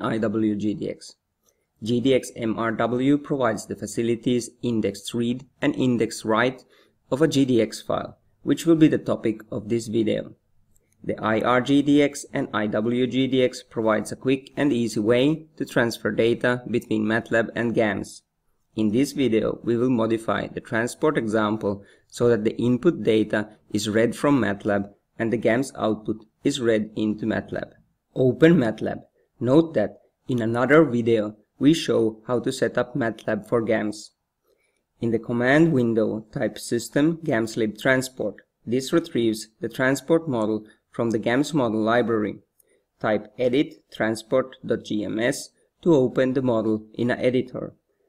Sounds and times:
Speech: 0:00.0 - 0:01.2, 0:01.8 - 0:10.4, 0:11.0 - 0:34.2, 0:35.0 - 0:47.8.

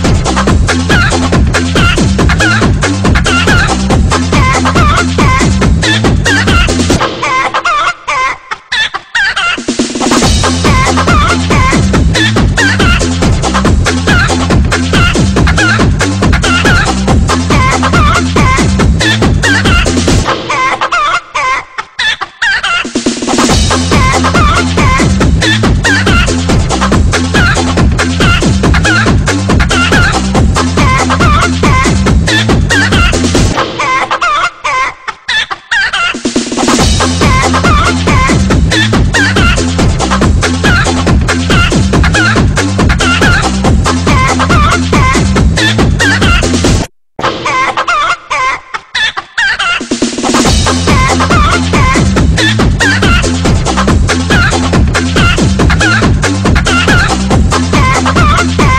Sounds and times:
Music: 0:00.0 - 0:08.5, 0:09.2 - 0:21.7, 0:22.6 - 0:34.8, 0:36.0 - 0:48.5, 0:49.8 - 0:58.7.

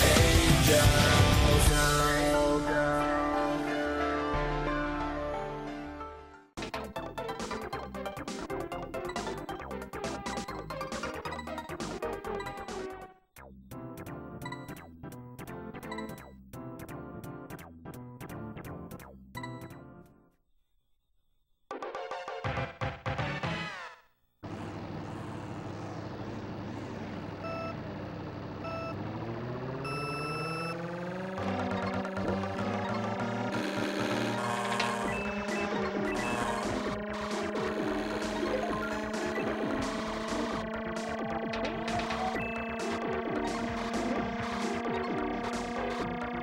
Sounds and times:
Music: 0:00.0 - 0:20.4, 0:21.7 - 0:24.1, 0:31.4 - 0:46.4.

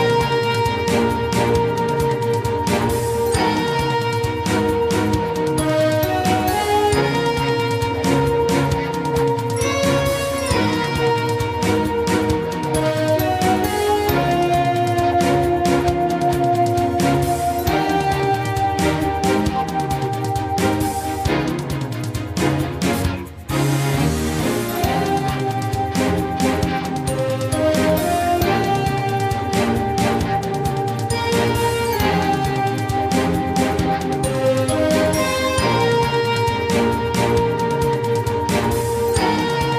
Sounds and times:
Music: 0:00.0 - 0:39.7.

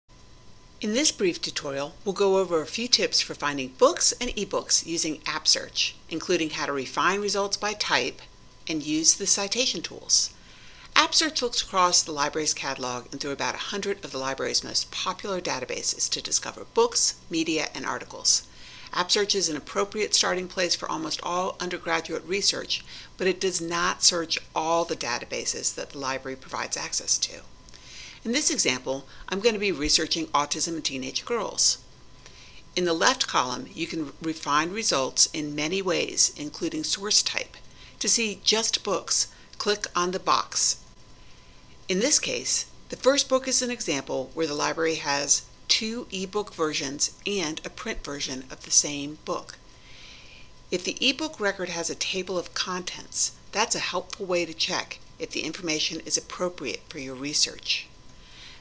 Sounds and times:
Narration, monologue: 0:00.1 - 0:58.6.

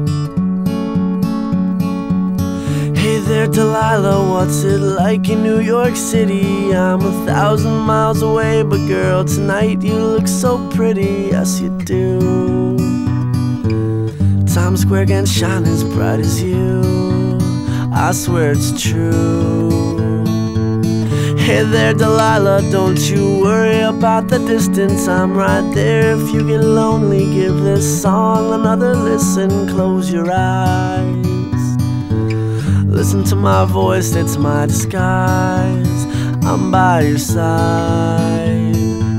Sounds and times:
Inside, small room: 0:00.0 - 0:39.1
Music: 0:00.0 - 0:39.1.

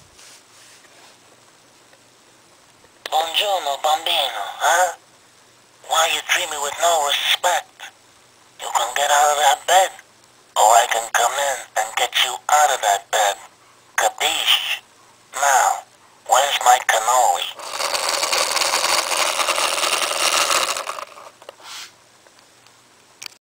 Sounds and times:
Speech: 0:03.1 - 0:05.0, 0:05.8 - 0:08.0, 0:08.6 - 0:10.0, 0:10.6 - 0:17.6.

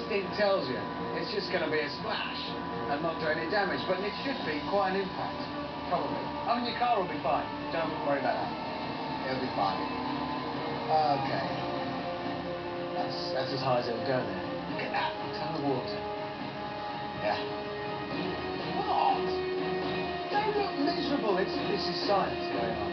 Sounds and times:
Music: 0:00.0 - 0:22.9.

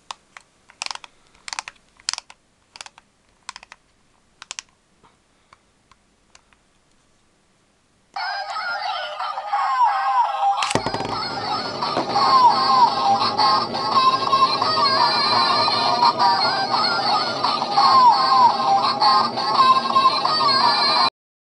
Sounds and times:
Music: 0:08.2 - 0:21.1.

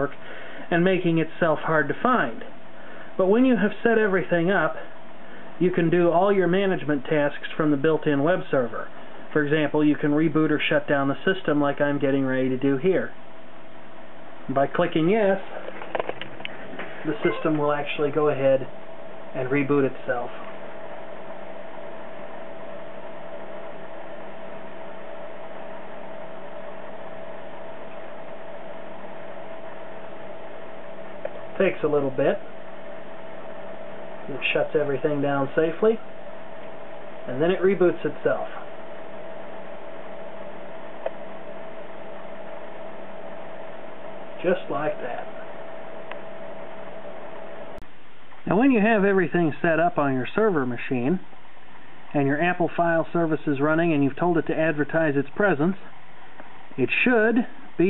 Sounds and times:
Speech: 0:00.0 - 0:02.5, 0:03.2 - 0:04.9, 0:05.6 - 0:13.2, 0:14.5 - 0:15.6, 0:17.0 - 0:18.7, 0:19.4 - 0:20.5, 0:31.6 - 0:32.4, 0:34.3 - 0:36.0, 0:37.3 - 0:38.7, 0:44.4 - 0:45.4, 0:48.4 - 0:51.3, 0:52.1 - 0:55.9, 0:56.8 - 0:57.9
Inside, small room: 0:00.0 - 0:57.9.

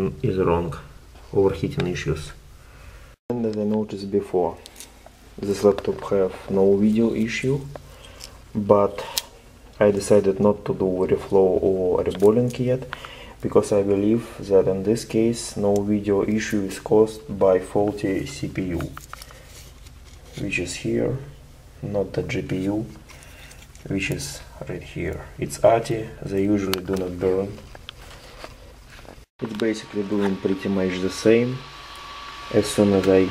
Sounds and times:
Speech: 0:00.0 - 0:02.4, 0:03.3 - 0:04.6, 0:05.4 - 0:07.8, 0:08.6 - 0:19.0, 0:20.4 - 0:23.0, 0:23.8 - 0:27.6, 0:29.4 - 0:31.7, 0:32.5 - 0:33.3.

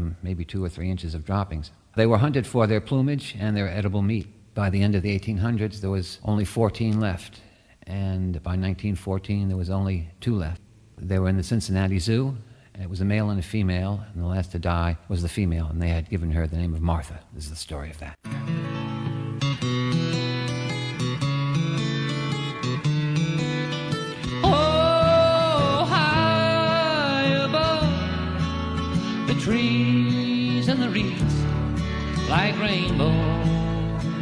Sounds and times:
Speech: 0:00.0 - 0:18.3
Music: 0:18.2 - 0:34.2.

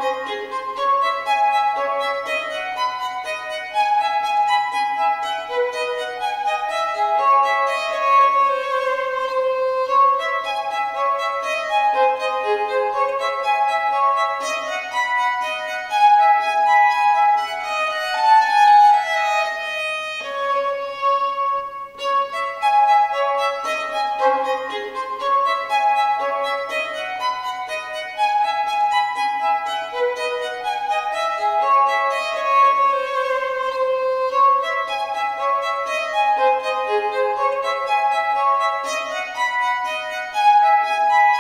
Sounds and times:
Violin, fiddle: 0:00.0 - 0:41.4.

